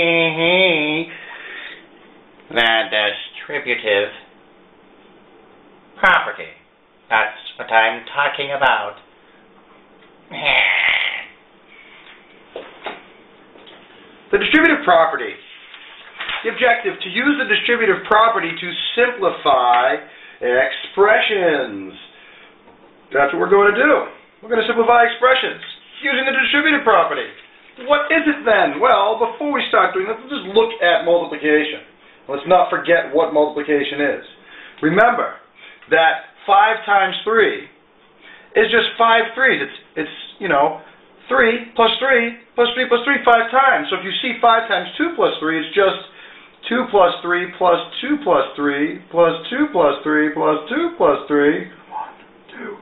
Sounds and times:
Speech: 0.0s - 1.1s, 2.5s - 4.3s, 6.0s - 9.1s, 14.3s - 15.6s, 16.3s - 22.2s, 23.1s - 37.8s, 38.5s - 52.8s
Inside, small room: 0.0s - 52.8s.

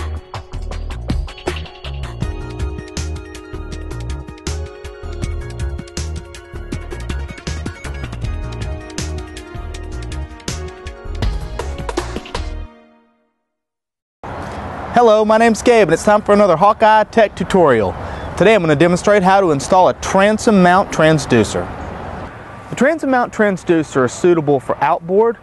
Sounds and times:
Speech: 15.0s - 21.7s, 22.7s - 25.4s.

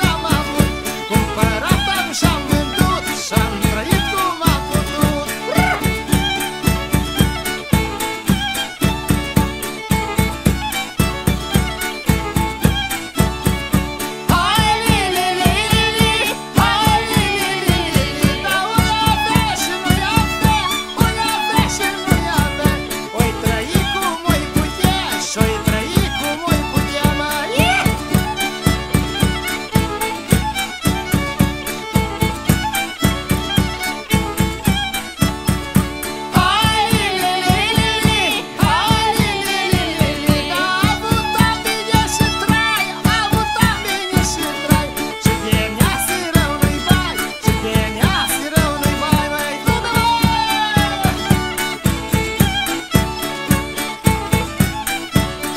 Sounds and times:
Music: 0.0s - 55.5s.

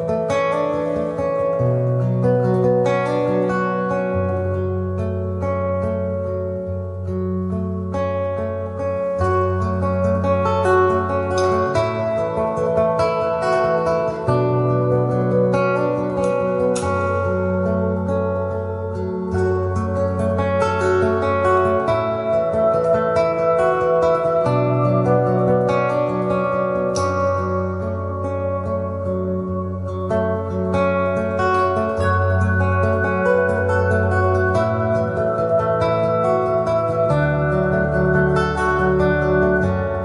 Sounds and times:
Music: 0.0s - 40.0s.

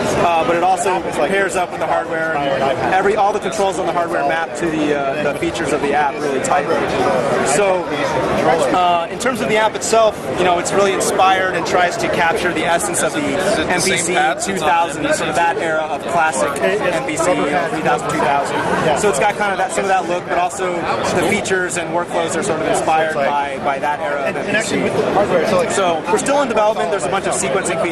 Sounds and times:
Speech: 0.0s - 27.9s.

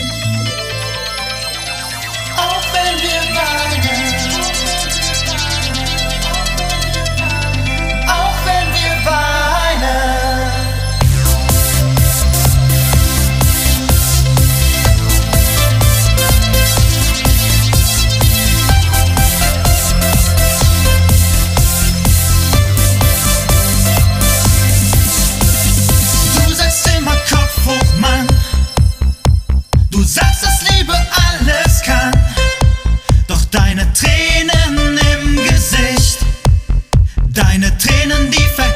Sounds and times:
Disco: 0.0s - 38.7s.

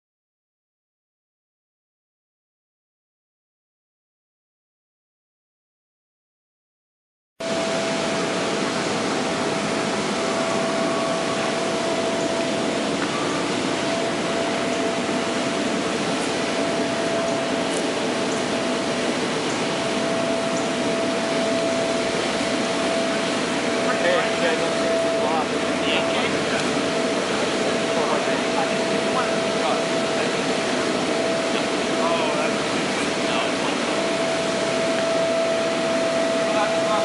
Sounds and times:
Waterfall: 7.4s - 37.0s.

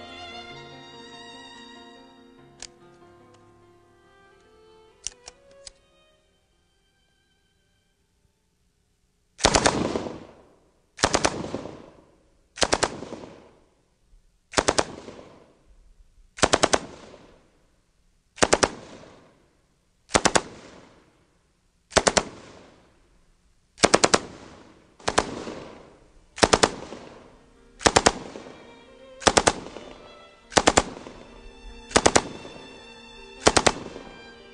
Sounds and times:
Machine gun: 9.4s - 10.4s, 11.0s - 12.0s, 12.6s - 13.5s, 14.5s - 15.4s, 16.4s - 17.3s, 18.4s - 19.2s, 20.1s - 21.0s, 21.9s - 22.8s, 23.8s - 27.2s, 27.8s - 28.3s, 29.2s - 29.6s, 30.5s - 31.0s, 31.9s - 32.3s.

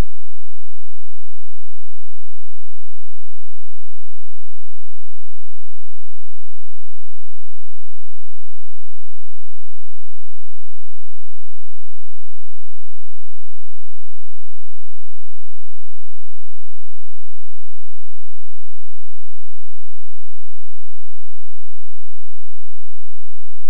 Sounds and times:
Silence: 0.0s - 23.7s.

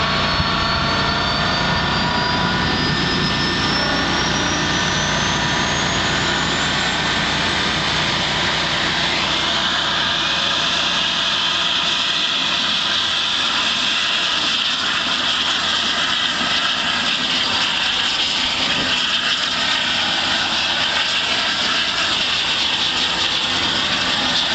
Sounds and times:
Vehicle: 0.0s - 24.5s
Idling: 3.6s - 14.4s.

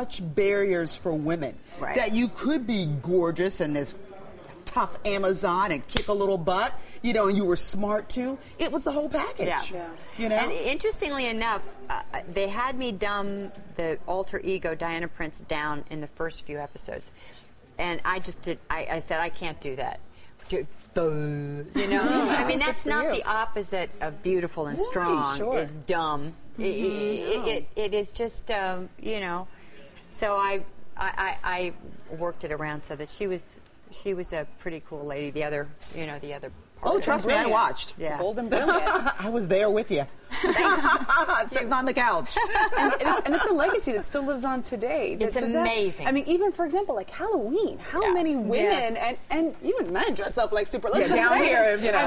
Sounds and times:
Female speech, woman speaking: 1.8s - 2.2s, 8.6s - 17.0s, 17.8s - 29.5s, 30.2s - 39.0s, 41.1s - 52.0s.

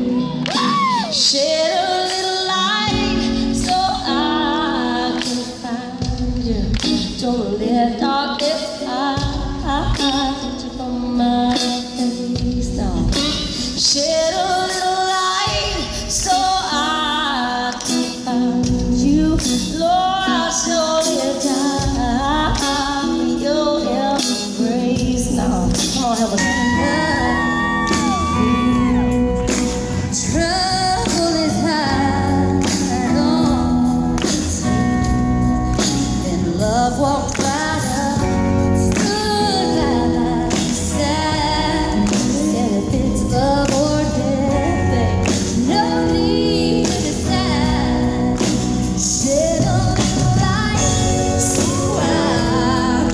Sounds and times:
Electric guitar: 0.0s - 53.1s.

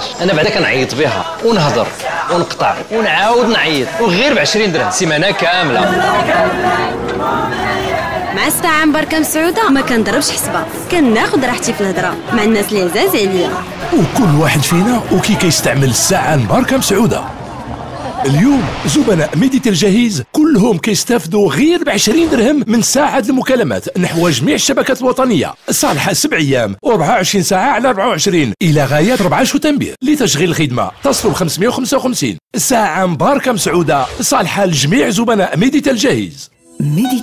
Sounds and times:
Speech: 0.0s - 6.1s, 8.4s - 17.3s, 18.2s - 37.2s.

